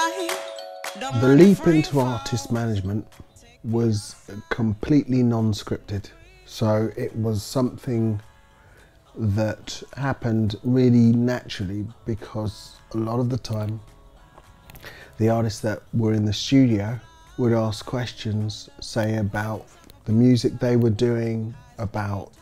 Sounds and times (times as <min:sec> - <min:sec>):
Music: 0:00.0 - 0:22.4
Speech: 0:01.1 - 0:08.3, 0:09.2 - 0:13.8, 0:15.2 - 0:22.4.